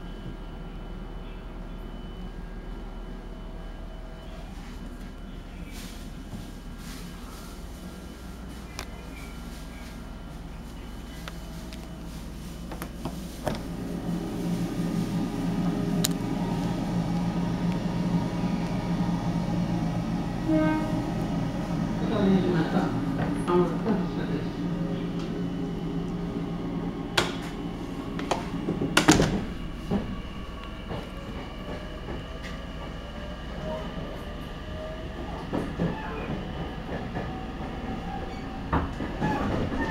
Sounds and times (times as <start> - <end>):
Train: 0.0 - 39.9.